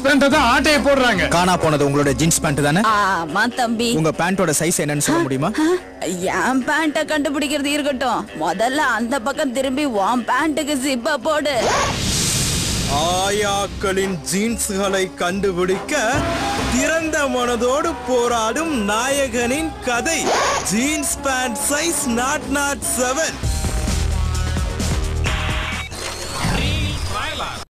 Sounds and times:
Music: 0.0s - 11.7s, 12.9s - 27.6s.

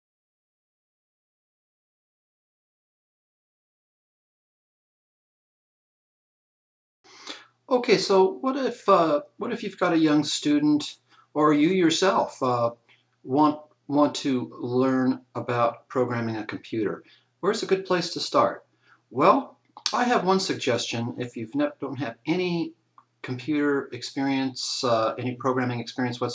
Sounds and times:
Speech: 7.3s - 12.7s, 13.3s - 26.3s.

